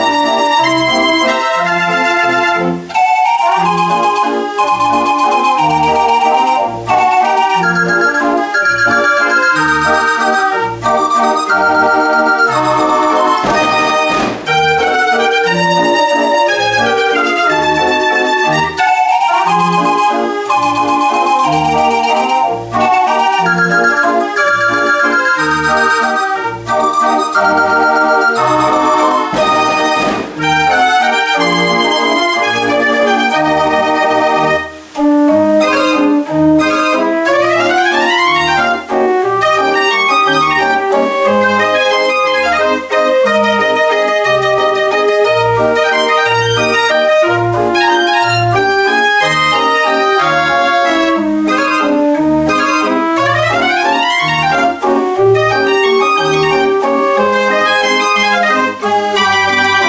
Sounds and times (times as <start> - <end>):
Musical instrument: 0.0 - 59.8.